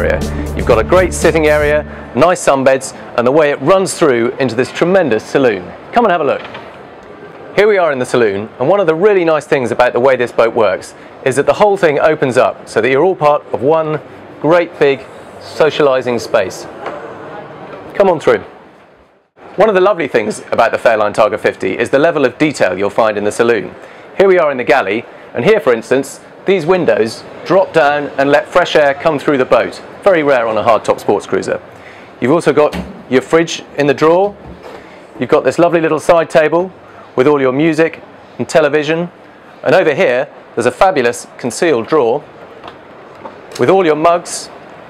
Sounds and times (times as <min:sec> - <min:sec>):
Speech: 0:00.0 - 0:06.5, 0:07.6 - 0:18.5, 0:19.6 - 0:34.4, 0:35.2 - 0:42.3, 0:43.6 - 0:44.6.